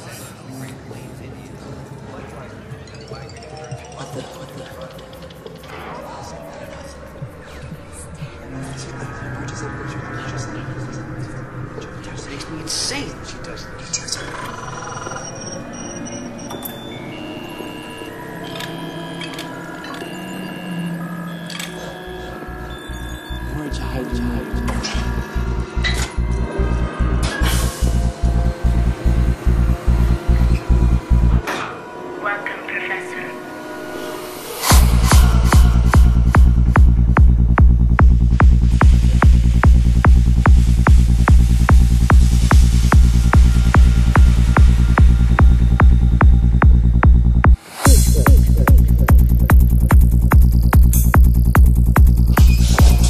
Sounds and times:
Music: 0.0 - 53.0
Female speech, woman speaking: 32.2 - 33.4.

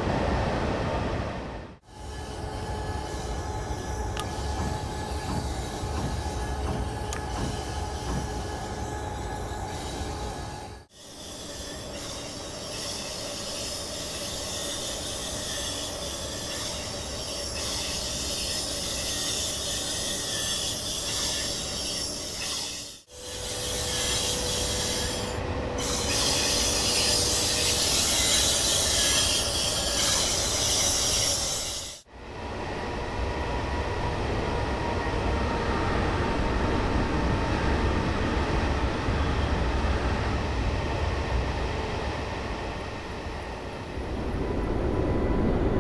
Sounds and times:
Railroad car, train wagon: 0.0 - 45.8
Train: 0.0 - 45.8.

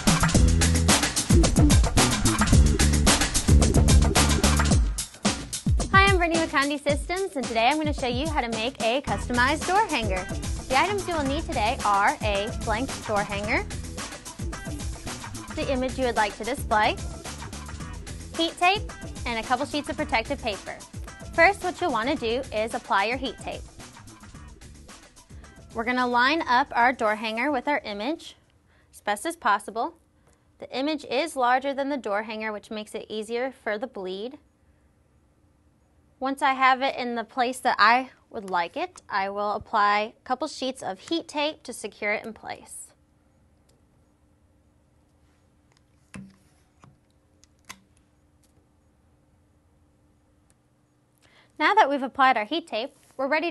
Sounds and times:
Speech: 5.9 - 13.7, 15.5 - 17.0, 18.4 - 23.6, 25.8 - 28.4, 29.0 - 30.0, 30.6 - 34.4, 36.2 - 43.0, 51.6 - 53.5.

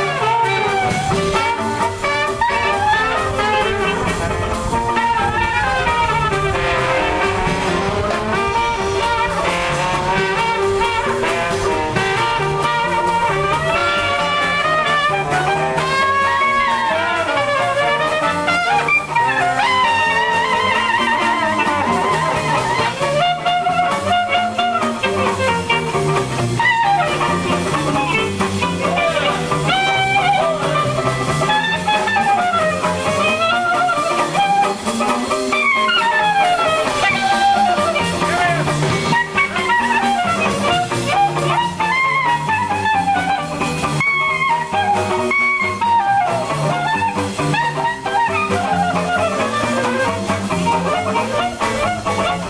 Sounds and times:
Swing music: 0.0 - 52.4.

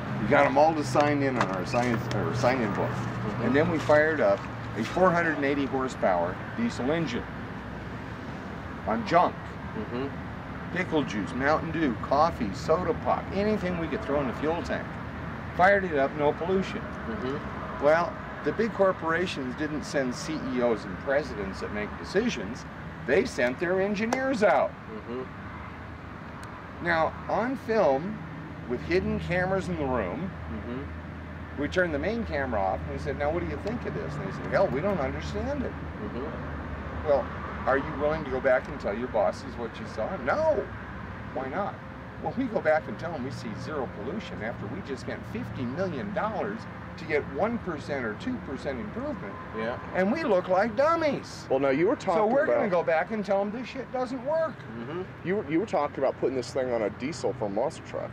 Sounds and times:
Vehicle: 0.0 - 58.1
Speech: 0.2 - 7.3, 8.9 - 10.2, 10.8 - 14.9, 15.6 - 25.3, 26.8 - 30.9, 31.6 - 36.4, 37.1 - 40.7, 41.4 - 58.1.

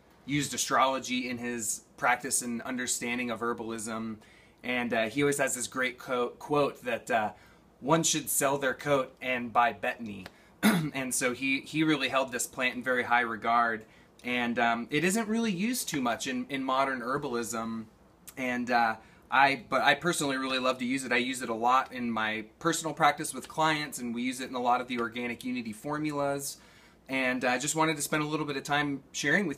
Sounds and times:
Speech: 0.3 - 29.5.

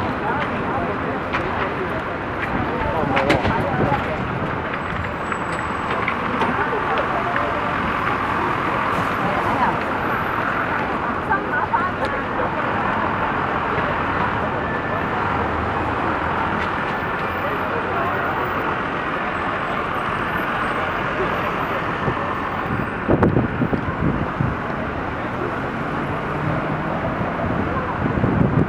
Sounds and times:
Speech: 0.0 - 22.9, 23.6 - 28.6.

